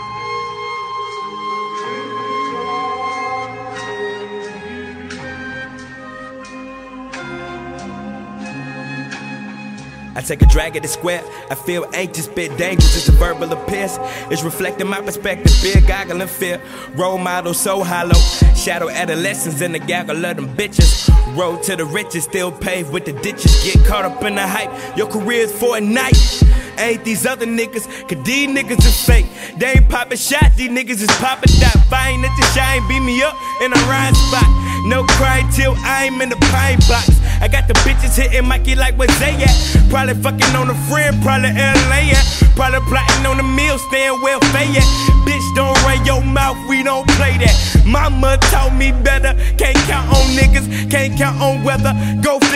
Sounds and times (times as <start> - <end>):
Rapping: 10.2 - 52.5.